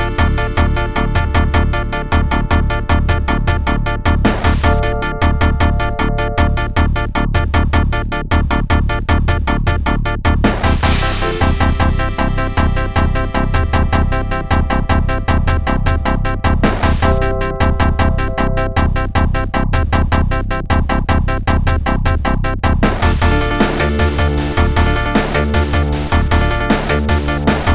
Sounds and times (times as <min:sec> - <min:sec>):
Music: 0:00.0 - 0:27.7.